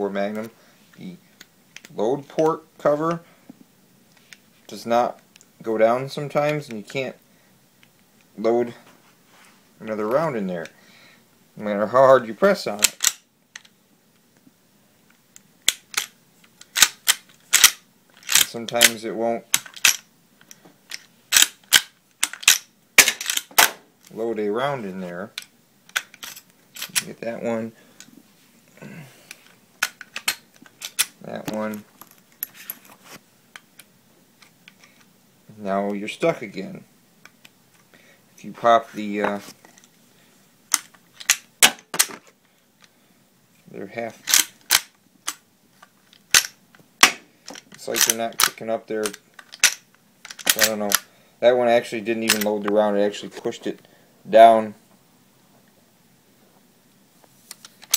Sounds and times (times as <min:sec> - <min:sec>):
Speech: 0:00.0 - 0:01.2, 0:01.9 - 0:03.3, 0:04.7 - 0:07.2, 0:08.4 - 0:08.9, 0:09.8 - 0:10.8, 0:11.6 - 0:13.0, 0:18.4 - 0:19.5, 0:24.1 - 0:25.4, 0:26.9 - 0:27.8, 0:31.2 - 0:31.9, 0:35.5 - 0:36.9, 0:38.4 - 0:39.6, 0:43.7 - 0:44.2, 0:47.8 - 0:49.2, 0:50.5 - 0:54.8
Inside, small room: 0:00.0 - 0:57.9.